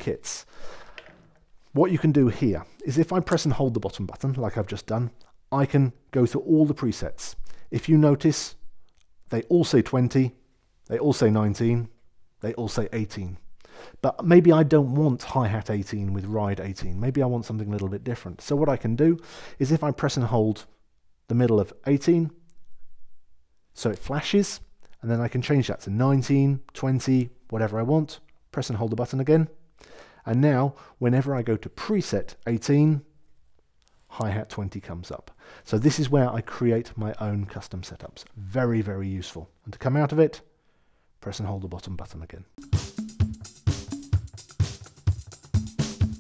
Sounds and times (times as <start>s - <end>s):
Speech: 0.0s - 0.5s, 1.8s - 8.6s, 9.3s - 13.4s, 14.0s - 22.4s, 23.8s - 29.6s, 30.2s - 33.1s, 34.1s - 40.5s, 41.2s - 42.6s.